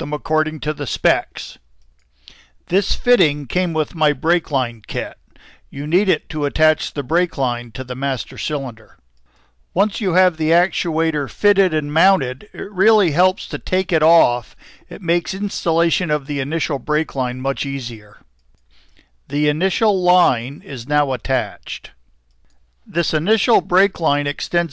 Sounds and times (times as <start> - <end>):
Speech: 0.0 - 1.6, 2.7 - 9.0, 9.8 - 18.3, 19.3 - 22.0, 22.9 - 24.7.